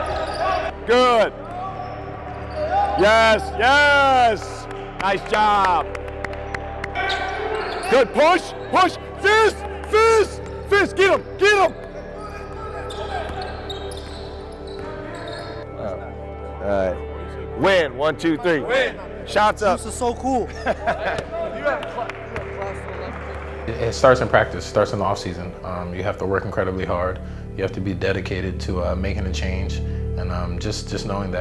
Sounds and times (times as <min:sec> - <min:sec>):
Inside, large room or hall: 0:00.0 - 0:31.4
Music: 0:00.0 - 0:31.4.